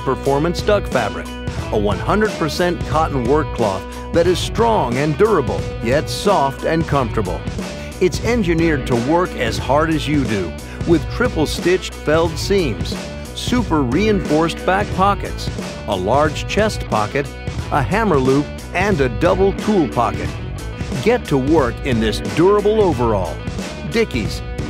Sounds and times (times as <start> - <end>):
Speech: 0.0 - 7.4, 8.0 - 20.3, 21.0 - 24.5
Music: 0.0 - 24.6.